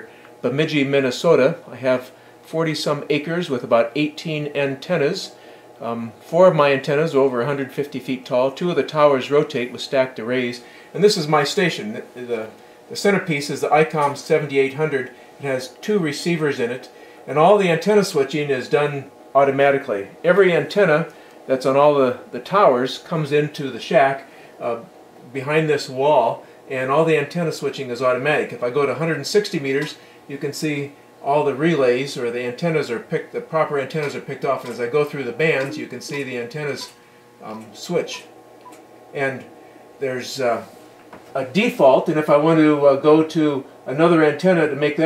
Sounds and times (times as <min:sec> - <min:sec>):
Speech: 0:00.0 - 0:38.3, 0:39.2 - 0:40.8, 0:41.4 - 0:45.0.